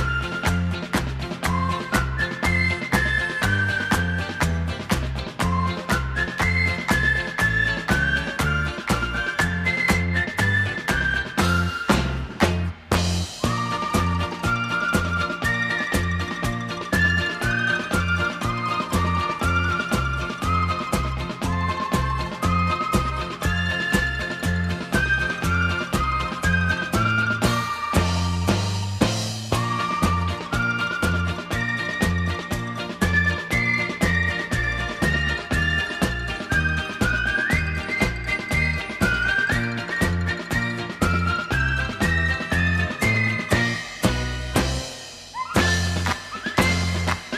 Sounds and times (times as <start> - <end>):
Music: 0.0 - 47.3
Whistling: 0.0 - 47.3.